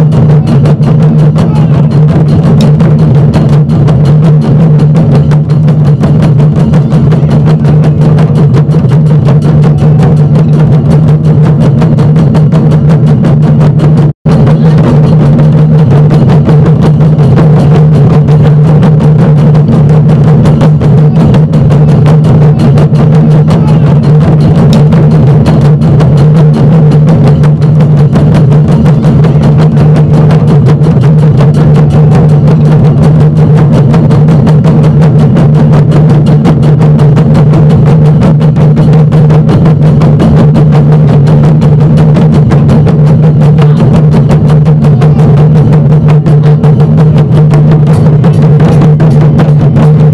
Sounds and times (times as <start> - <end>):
Music: 0.0 - 50.1
Outside, urban or manmade: 0.0 - 50.1
Speech: 1.3 - 2.2, 23.4 - 24.3.